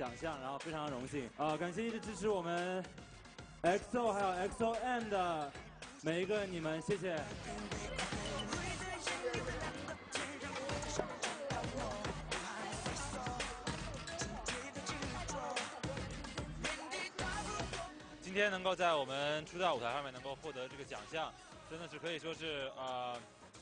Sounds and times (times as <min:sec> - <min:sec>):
Speech: 0:00.0 - 0:02.9, 0:03.6 - 0:07.3, 0:18.3 - 0:23.2
Music: 0:00.0 - 0:23.6.